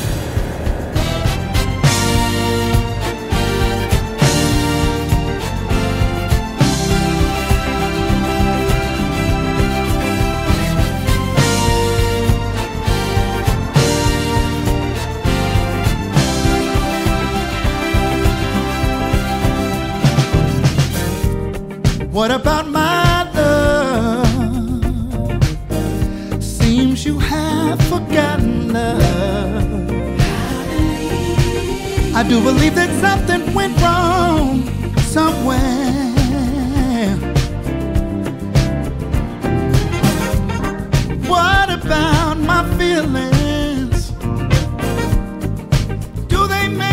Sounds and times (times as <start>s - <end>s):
Music: 0.0s - 46.9s.